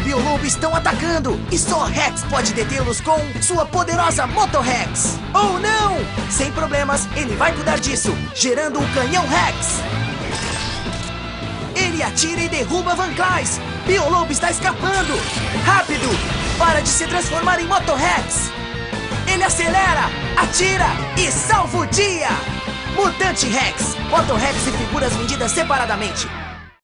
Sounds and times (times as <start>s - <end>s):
Speech: 0.0s - 9.8s, 11.8s - 18.5s, 19.3s - 26.4s
Music: 0.0s - 26.8s.